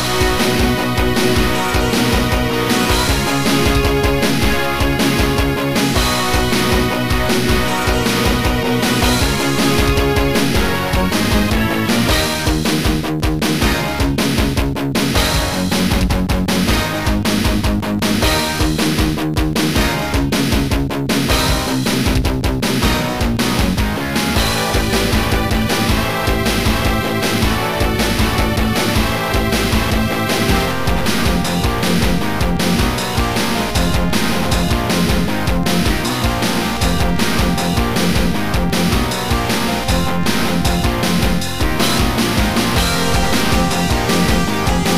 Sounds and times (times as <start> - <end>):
Blues: 0.0 - 44.9.